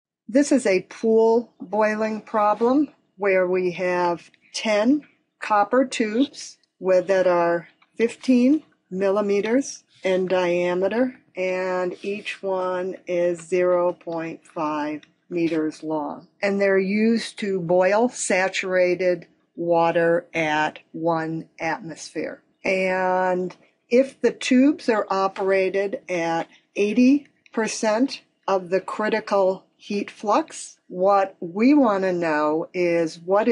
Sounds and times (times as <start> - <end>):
Speech: 0.3 - 33.5.